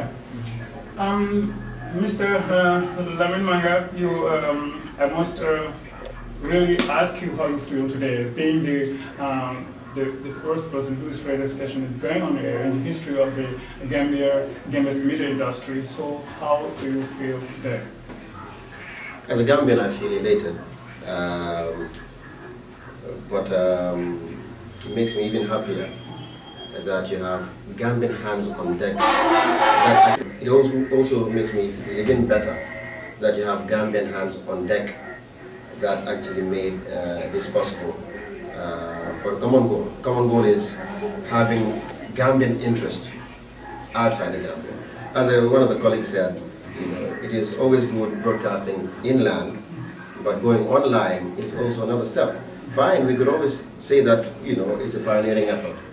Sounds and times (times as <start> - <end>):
Speech: 0.0 - 55.9.